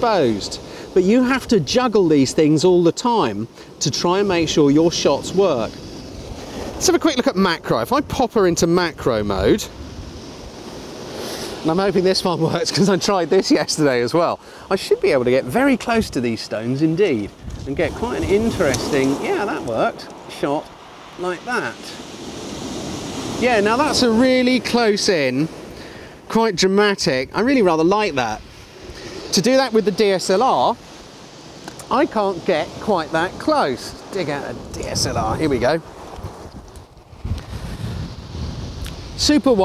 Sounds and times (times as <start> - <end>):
Speech: 0.0 - 5.7, 6.8 - 9.7, 11.6 - 22.0, 23.4 - 25.6, 26.3 - 28.4, 29.3 - 30.8, 31.8 - 35.8, 39.2 - 39.6.